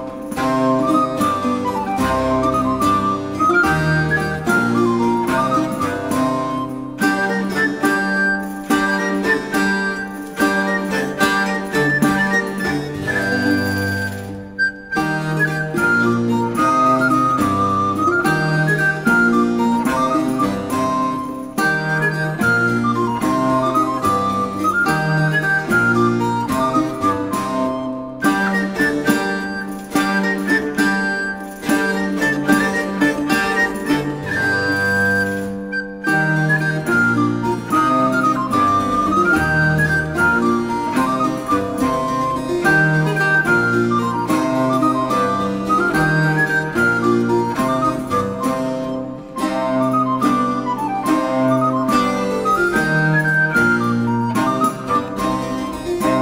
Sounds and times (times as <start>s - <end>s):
Music: 0.0s - 56.2s.